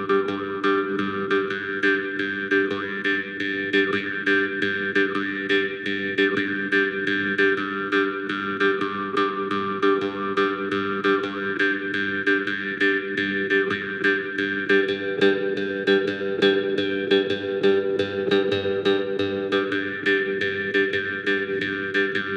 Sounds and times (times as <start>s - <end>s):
Harp: 0.0s - 22.3s.